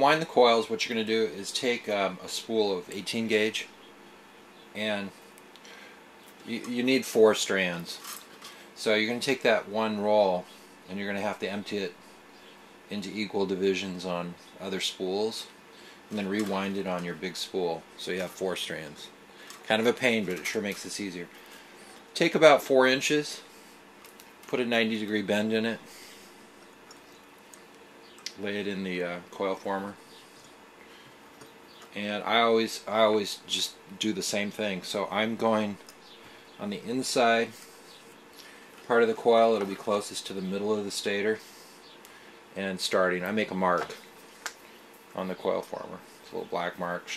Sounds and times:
Speech: 0:00.0 - 0:03.7, 0:04.7 - 0:05.2, 0:06.4 - 0:08.1, 0:08.8 - 0:12.0, 0:12.9 - 0:21.3, 0:22.2 - 0:23.5, 0:24.5 - 0:25.9, 0:28.3 - 0:30.0, 0:31.9 - 0:35.8, 0:36.6 - 0:37.6, 0:38.9 - 0:41.5, 0:42.6 - 0:44.0, 0:45.2 - 0:47.1.

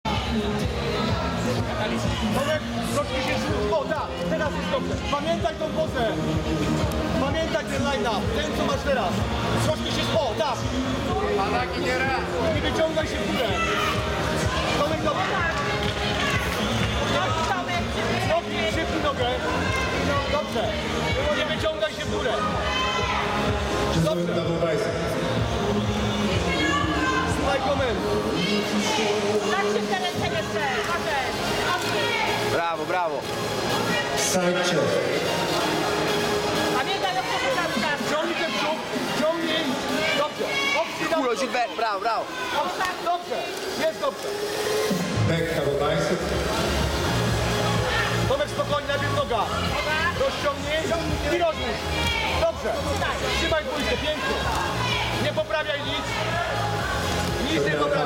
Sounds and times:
Inside, public space: 0:00.0 - 0:58.0
Music: 0:00.0 - 0:58.0.

